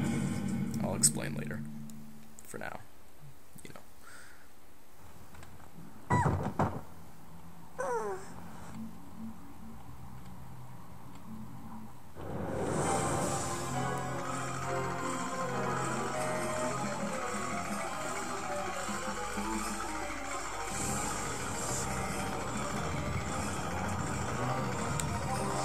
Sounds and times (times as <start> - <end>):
Music: 0.0 - 2.3, 8.3 - 25.6.